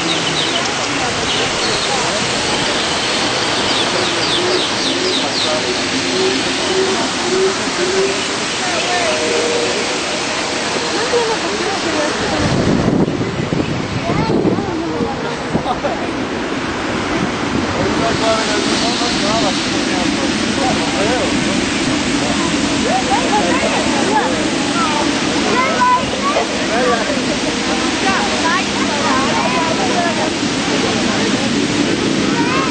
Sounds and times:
Speech: 0.0 - 16.2, 17.7 - 32.7.

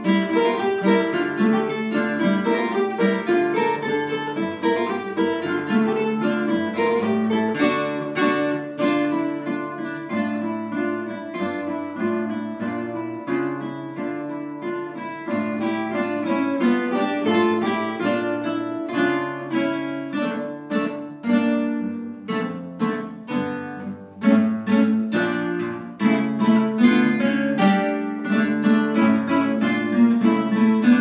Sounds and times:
Guitar: 0.0 - 31.0.

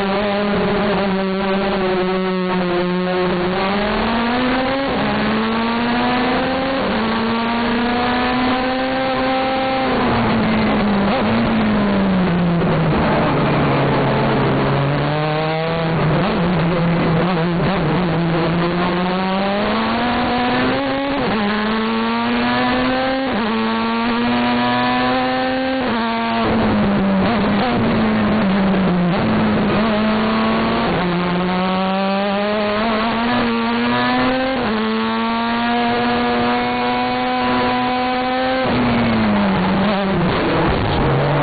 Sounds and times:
Car: 0.0 - 41.4.

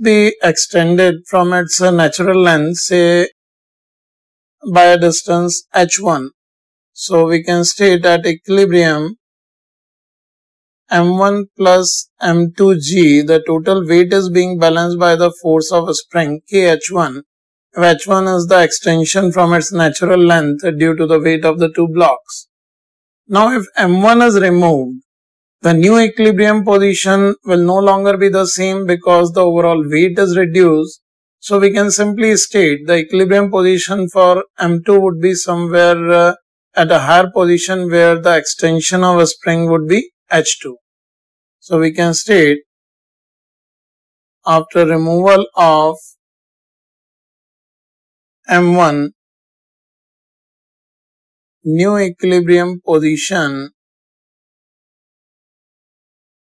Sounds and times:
Speech: 0.0 - 3.4, 4.6 - 6.4, 7.0 - 9.2, 10.9 - 22.5, 23.3 - 25.0, 25.7 - 40.8, 41.6 - 42.6, 44.5 - 46.2, 48.5 - 49.2, 51.7 - 53.8.

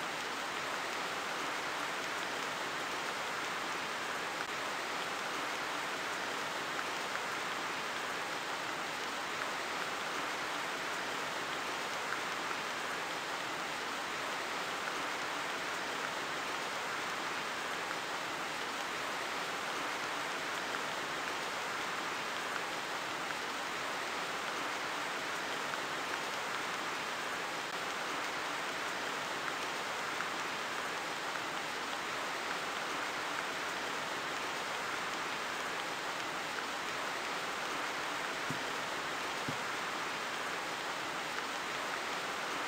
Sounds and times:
Rain on surface: 0.0 - 42.6.

